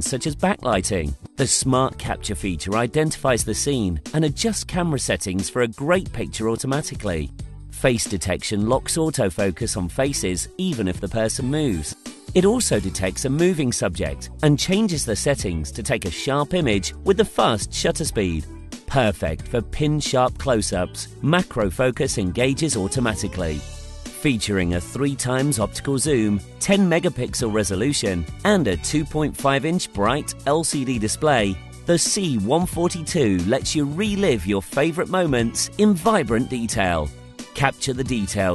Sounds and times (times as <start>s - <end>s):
Speech: 0.0s - 23.6s, 24.2s - 38.5s
Music: 0.0s - 38.5s.